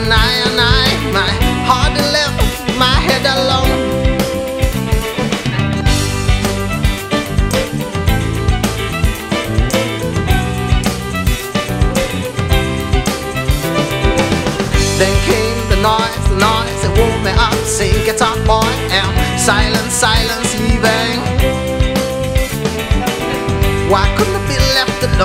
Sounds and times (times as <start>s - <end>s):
Music: 0.0s - 25.2s.